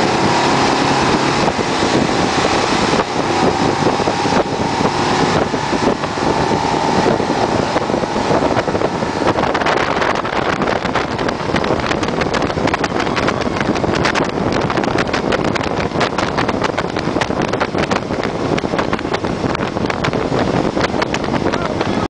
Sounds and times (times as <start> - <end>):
Speech: 21.5 - 22.0.